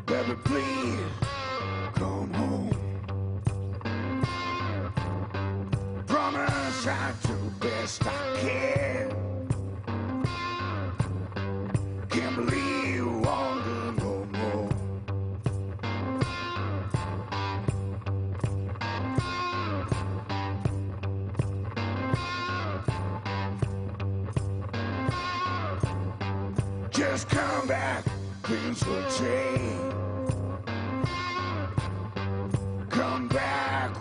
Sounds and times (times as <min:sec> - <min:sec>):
Music: 0:00.0 - 0:34.0.